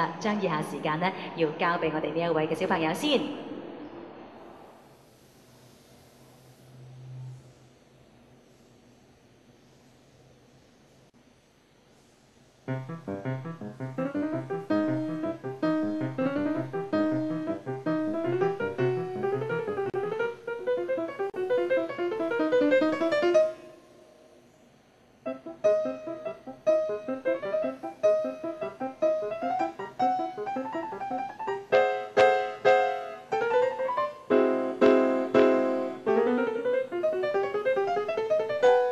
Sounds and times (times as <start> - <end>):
Music: 12.7 - 24.2, 25.2 - 38.9.